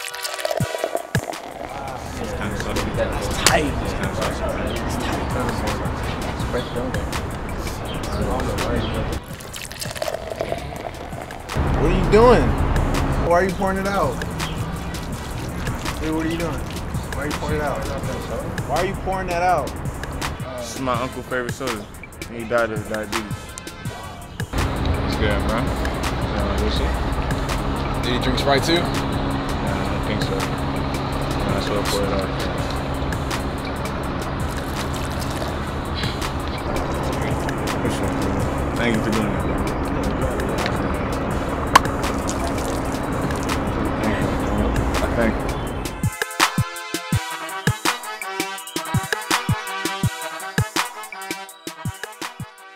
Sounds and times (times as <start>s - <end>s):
Music: 0.0s - 52.7s
Speech: 1.7s - 5.9s, 17.2s - 19.7s, 31.5s - 32.5s, 36.6s - 41.0s, 43.8s - 45.5s.